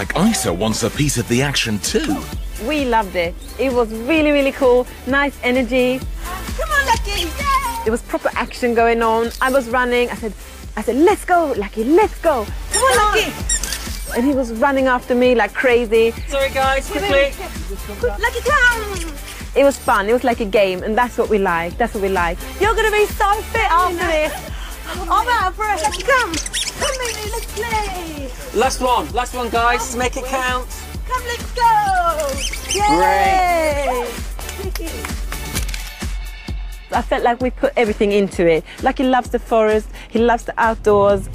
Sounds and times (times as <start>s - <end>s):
Music: 0.0s - 41.3s.